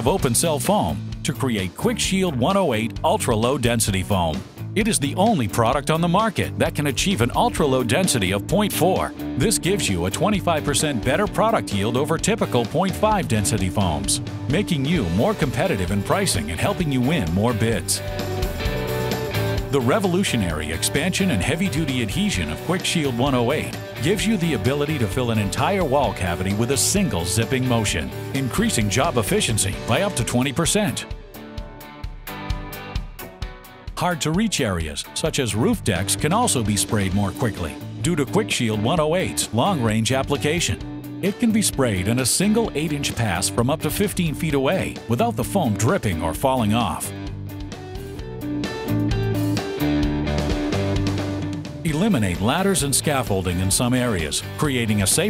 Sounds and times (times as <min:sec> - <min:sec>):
Speech: 0:00.0 - 0:18.0, 0:19.7 - 0:31.1, 0:34.0 - 0:47.2, 0:51.9 - 0:55.3
Music: 0:00.0 - 0:55.3.